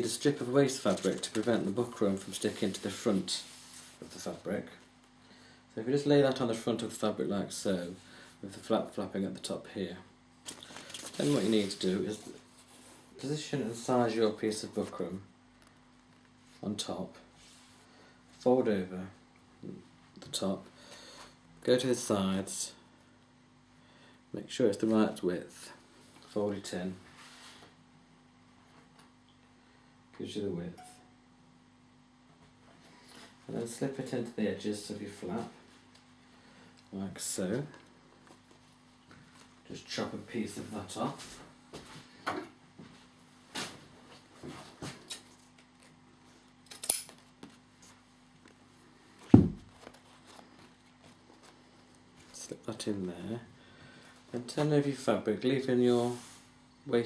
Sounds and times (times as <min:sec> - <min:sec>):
Speech: 0:00.0 - 0:04.9, 0:05.7 - 0:10.1, 0:11.2 - 0:12.4, 0:13.2 - 0:15.3, 0:16.6 - 0:17.3, 0:18.4 - 0:20.7, 0:21.6 - 0:22.8, 0:24.3 - 0:27.1, 0:30.2 - 0:31.0, 0:33.5 - 0:35.6, 0:36.9 - 0:37.8, 0:39.6 - 0:41.4, 0:52.3 - 0:53.5, 0:54.3 - 0:56.3.